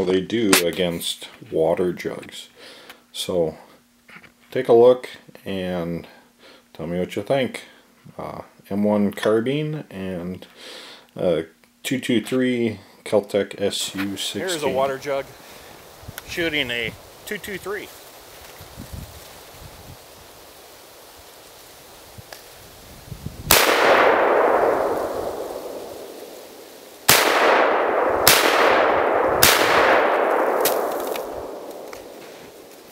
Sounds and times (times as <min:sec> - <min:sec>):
Speech: 0:00.0 - 0:03.7, 0:04.5 - 0:06.2, 0:06.8 - 0:10.5, 0:11.2 - 0:15.3, 0:16.2 - 0:17.9.